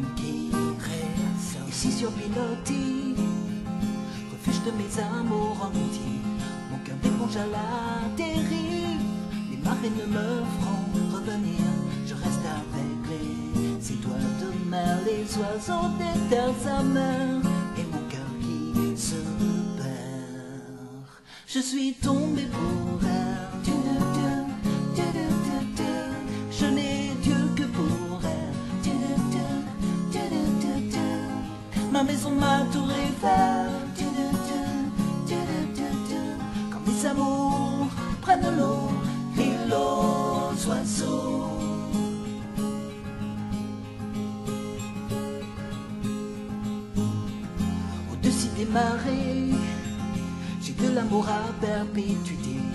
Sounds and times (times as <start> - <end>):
Music: 0.0 - 52.7.